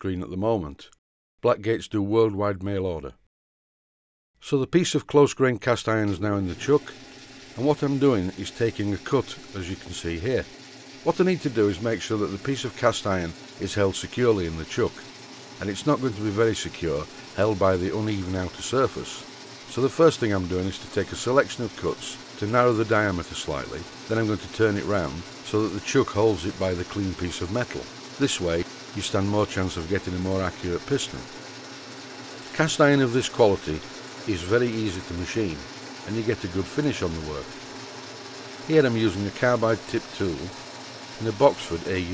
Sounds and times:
Speech: 0.0 - 3.2, 4.4 - 6.9, 7.6 - 10.5, 11.1 - 15.0, 15.6 - 31.3, 32.5 - 37.6, 38.7 - 40.6, 41.2 - 42.1
Power tool: 6.1 - 42.1.

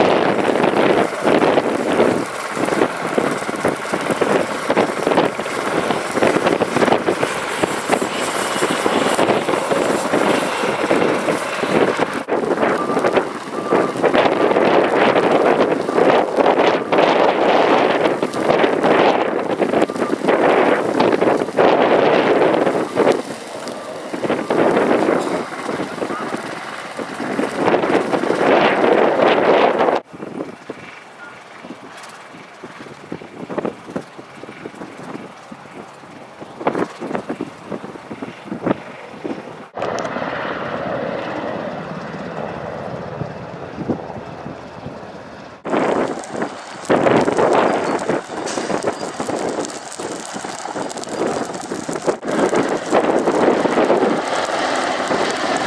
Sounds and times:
Wind noise (microphone): 0.0 - 40.1, 43.1 - 55.6
Fire: 0.0 - 55.6.

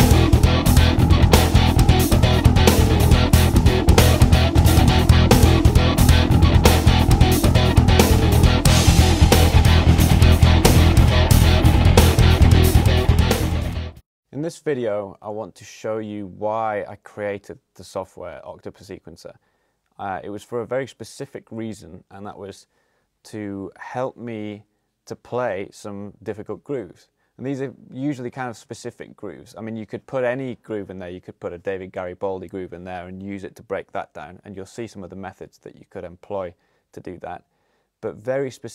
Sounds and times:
Speech: 14.3 - 19.4, 20.0 - 38.7.

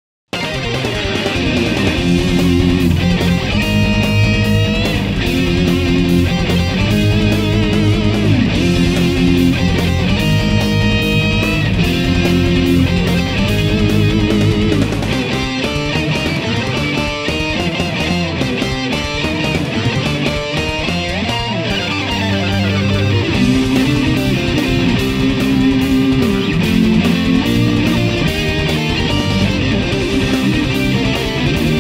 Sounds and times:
Electric guitar: 0.3 - 31.8.

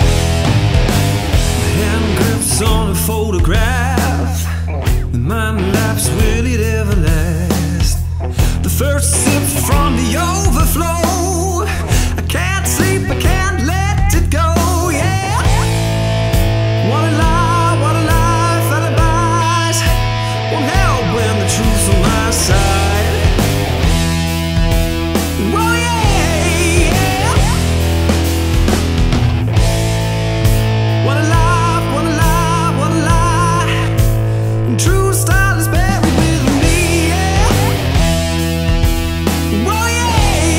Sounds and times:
Heavy metal: 0.0 - 40.5
Punk rock: 0.0 - 40.5.

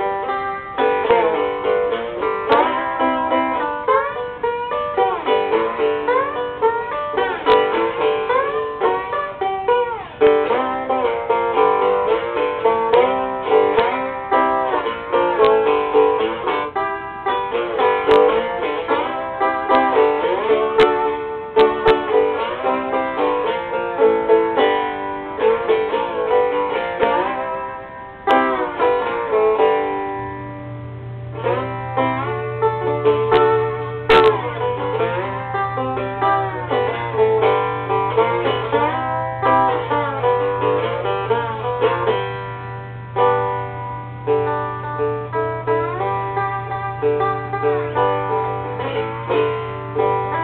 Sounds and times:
Strum: 0.0 - 50.4.

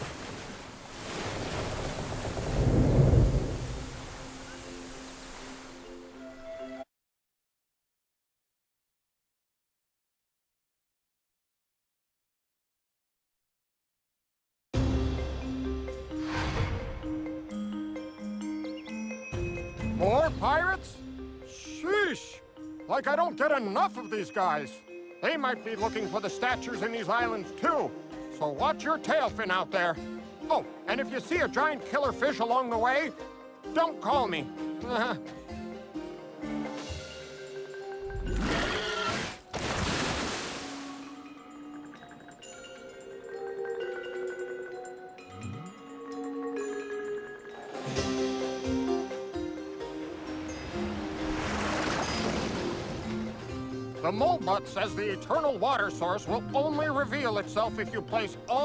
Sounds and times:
Music: 3.7 - 6.9, 14.8 - 39.8, 40.6 - 58.6
Speech: 20.0 - 33.1, 33.8 - 35.2, 54.0 - 58.6.

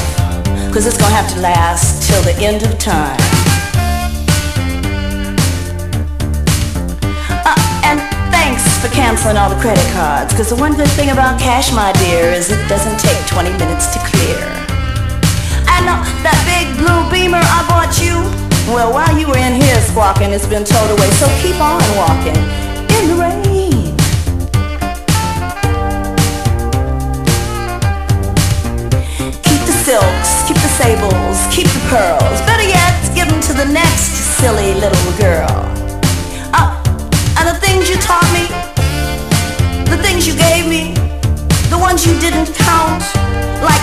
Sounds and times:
Speech: 0.7 - 3.3, 7.2 - 14.6, 15.6 - 24.0, 29.4 - 35.8, 36.5 - 36.8, 37.4 - 38.6, 39.9 - 41.0, 41.7 - 43.0, 43.6 - 43.8.

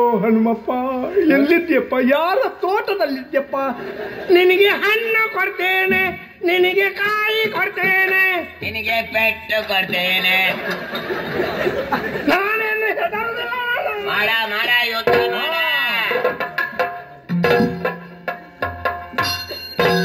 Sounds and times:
Speech: 0.0 - 10.6, 12.3 - 16.2
Music: 14.1 - 20.0.

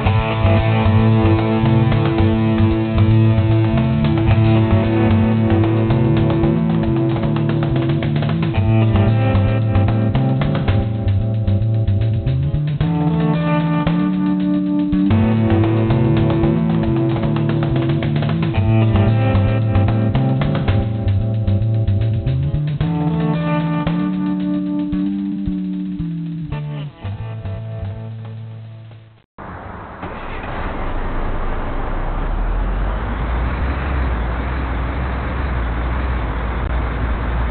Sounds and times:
Music: 0.0 - 29.2.

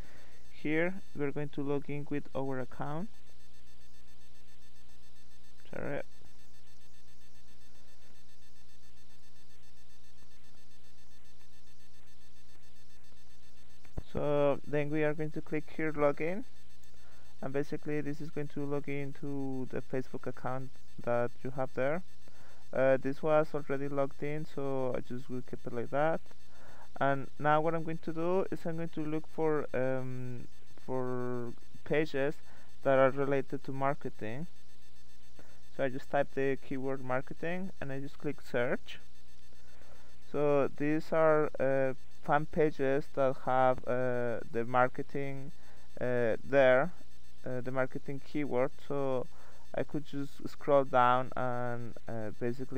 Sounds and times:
Speech: 0.5 - 3.1, 5.7 - 6.0, 14.0 - 16.4, 17.4 - 22.0, 22.8 - 26.2, 27.0 - 34.5, 35.8 - 39.0, 40.3 - 52.7.

